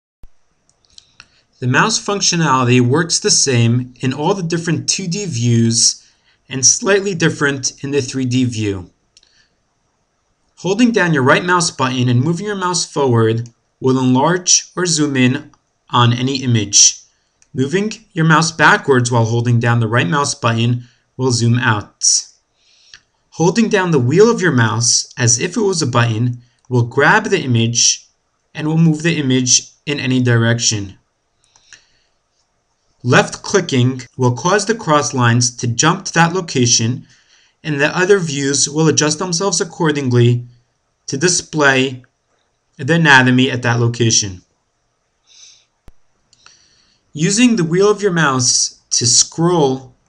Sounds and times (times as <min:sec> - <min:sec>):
Speech: 0:01.6 - 0:08.9, 0:10.6 - 0:22.3, 0:23.4 - 0:31.0, 0:33.1 - 0:42.1, 0:42.8 - 0:44.5, 0:47.2 - 0:50.0.